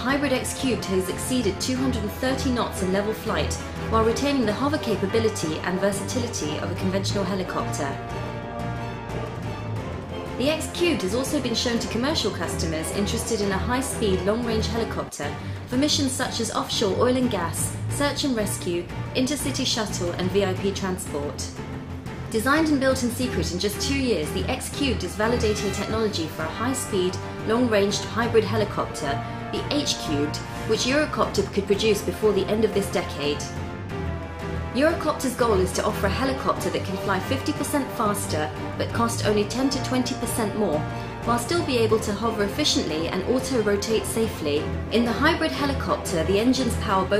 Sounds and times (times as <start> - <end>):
Speech: 0.0 - 8.0, 10.4 - 21.6, 22.3 - 33.5, 34.8 - 47.1
Music: 0.0 - 47.1.